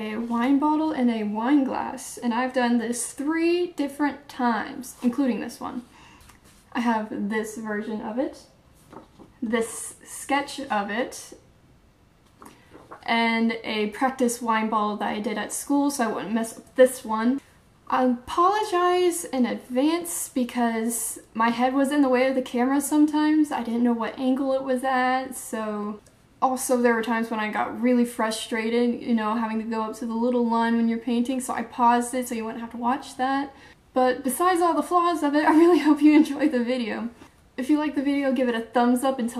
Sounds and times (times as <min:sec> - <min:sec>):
Speech: 0:00.0 - 0:05.9, 0:06.7 - 0:08.5, 0:09.4 - 0:11.4, 0:13.0 - 0:39.3.